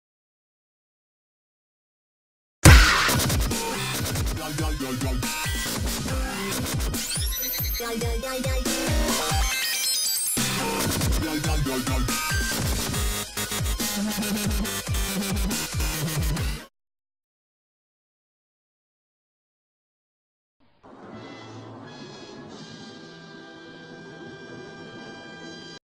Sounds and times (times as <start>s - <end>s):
Music: 2.6s - 16.7s, 20.8s - 25.8s.